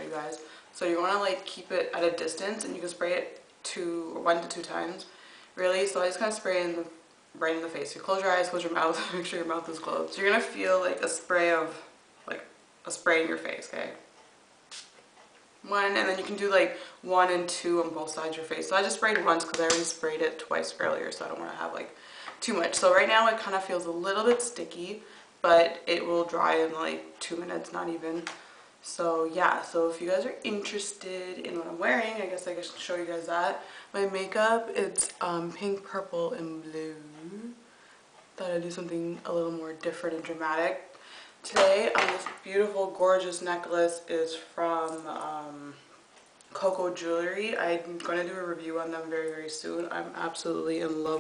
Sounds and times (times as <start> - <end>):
Speech: 0.0 - 14.1, 15.6 - 37.6, 38.4 - 45.8, 46.5 - 51.2.